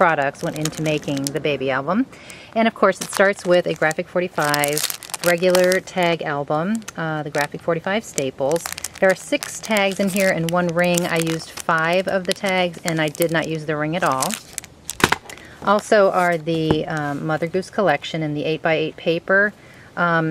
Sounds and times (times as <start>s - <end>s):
Speech: 0.0s - 14.4s, 15.6s - 20.3s.